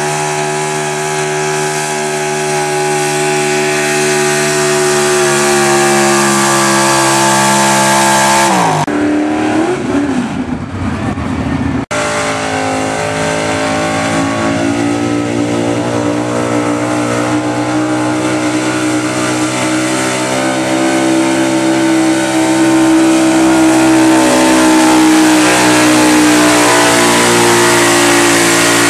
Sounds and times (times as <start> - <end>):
Car: 0.0 - 28.8.